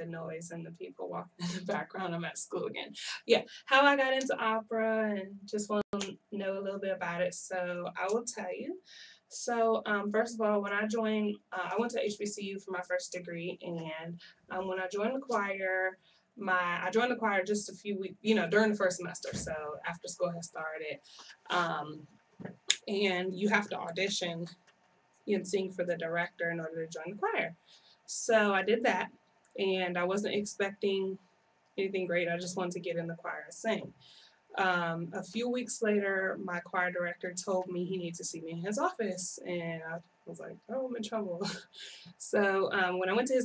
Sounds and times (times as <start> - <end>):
Speech: 0.0 - 24.5, 25.3 - 27.5, 28.1 - 31.2, 31.8 - 33.9, 34.6 - 43.4.